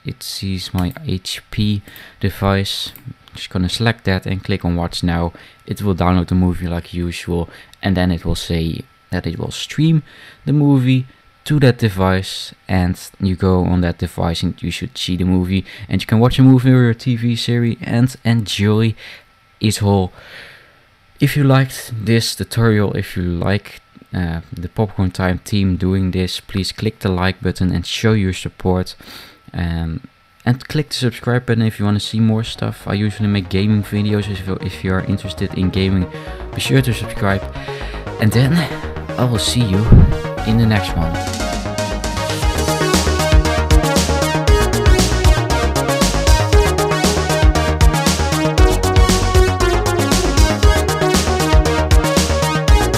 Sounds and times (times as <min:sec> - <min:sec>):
Speech: 0:00.0 - 0:19.0, 0:19.6 - 0:20.2, 0:21.2 - 0:37.5, 0:38.2 - 0:41.2.